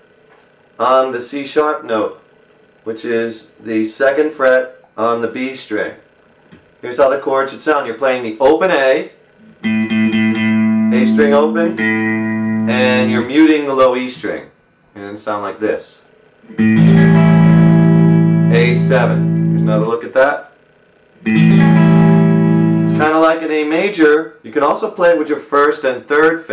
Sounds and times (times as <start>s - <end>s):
Speech: 0.8s - 2.2s, 2.8s - 6.0s, 6.8s - 9.2s, 10.9s - 11.8s, 12.7s - 16.1s, 18.5s - 20.6s, 22.9s - 26.5s
Acoustic guitar: 9.4s - 13.3s, 16.5s - 19.9s.